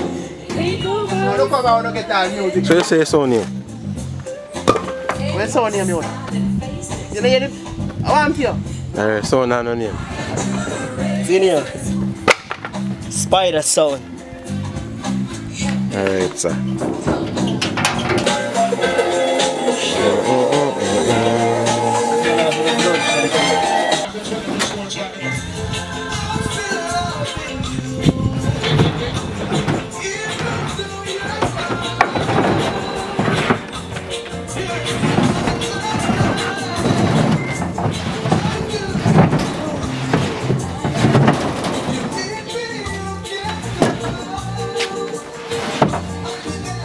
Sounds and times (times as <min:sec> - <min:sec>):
Music: 0:00.0 - 0:46.8.